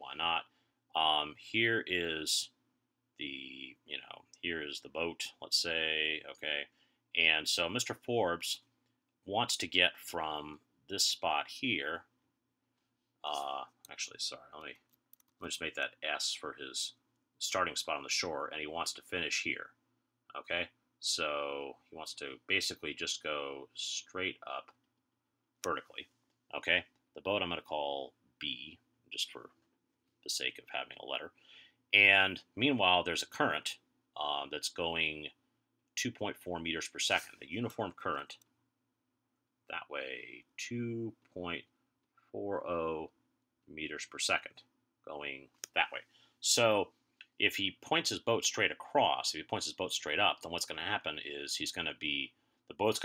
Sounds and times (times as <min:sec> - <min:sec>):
Speech: 0:00.0 - 0:02.6, 0:03.2 - 0:12.1, 0:13.2 - 0:14.8, 0:15.4 - 0:24.8, 0:25.6 - 0:29.6, 0:30.2 - 0:35.4, 0:36.0 - 0:38.5, 0:39.7 - 0:41.7, 0:42.3 - 0:53.0.